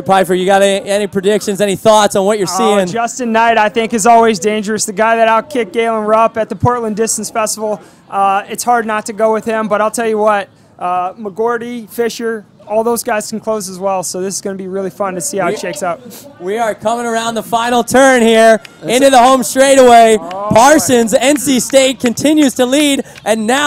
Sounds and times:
Speech: 0.0 - 23.6.

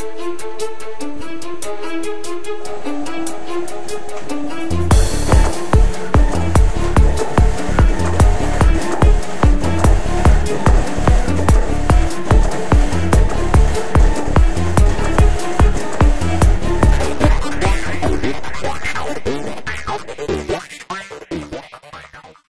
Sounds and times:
Music: 0.0 - 22.5
Printer: 2.8 - 18.2.

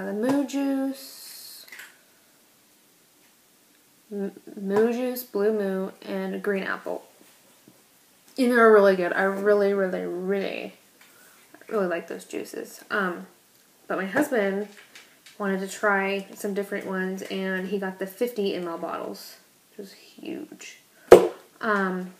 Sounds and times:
Speech: 0.0 - 1.7, 4.1 - 7.1, 8.4 - 10.8, 11.6 - 13.3, 13.9 - 14.8, 15.4 - 20.8, 21.6 - 22.2.

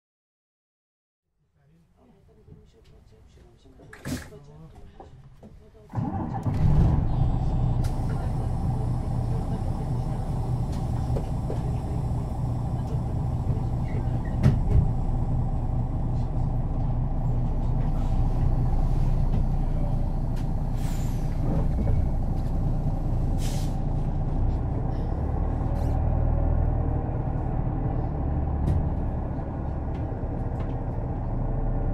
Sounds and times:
Vehicle: 5.9 - 31.9.

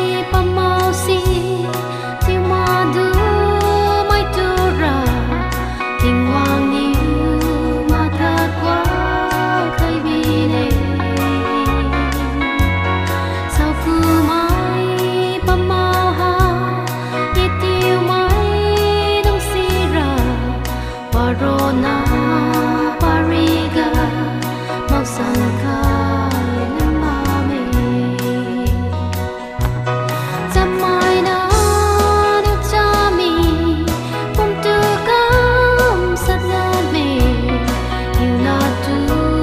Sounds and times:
Christmas music: 0.0 - 39.4
Gospel music: 0.0 - 39.4.

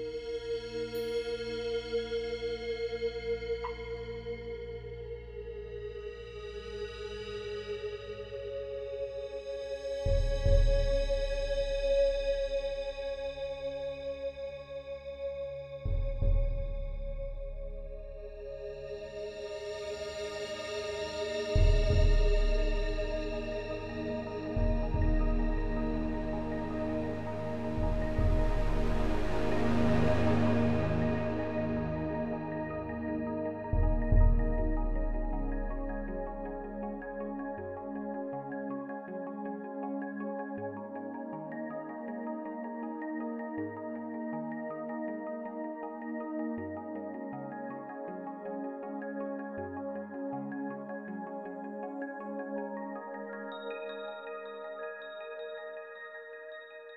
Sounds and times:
Music: 0.0 - 56.9.

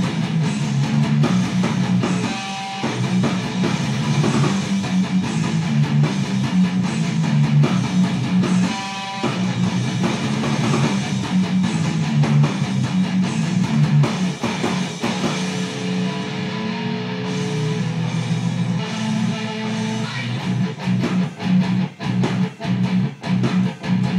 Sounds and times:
Electric guitar: 0.0 - 24.1.

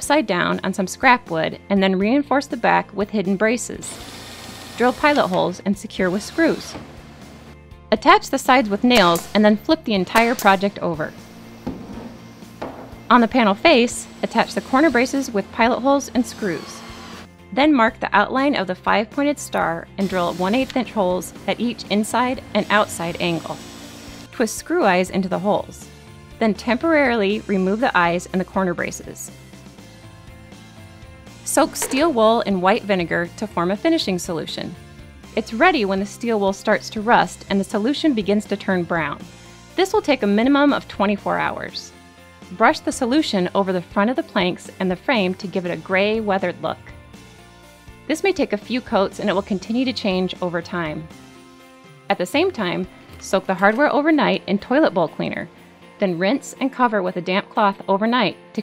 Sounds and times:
Speech: 0.0 - 4.0, 4.8 - 6.8, 7.9 - 11.2, 13.1 - 16.8, 17.6 - 23.6, 24.4 - 25.8, 26.4 - 29.3, 31.5 - 34.8, 35.4 - 39.2, 39.8 - 41.9, 42.6 - 46.9, 48.1 - 51.1, 52.1 - 58.6
Music: 0.0 - 58.6.

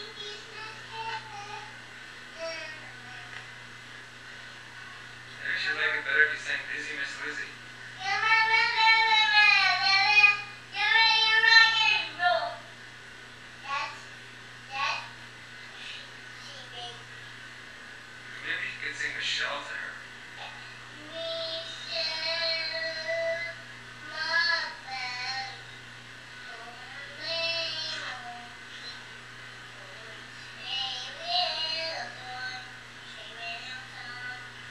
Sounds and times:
Speech: 5.4 - 7.6, 18.4 - 20.0.

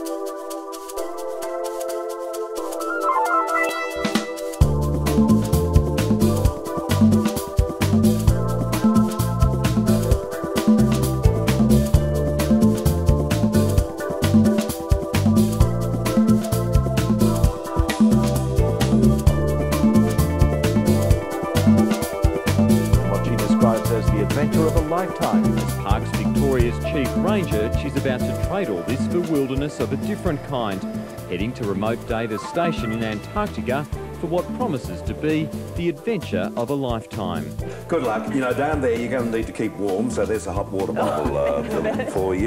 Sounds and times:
Music: 0.0 - 42.4
Speech: 23.0 - 42.4.

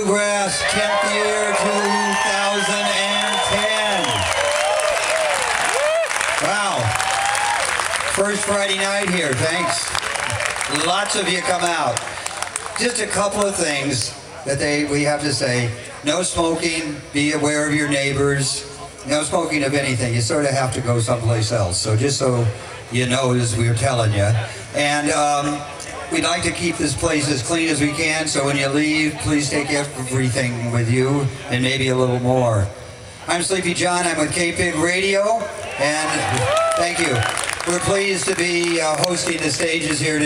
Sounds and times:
Speech: 0.0 - 4.1, 8.2 - 10.0, 10.7 - 12.0, 12.8 - 40.2.

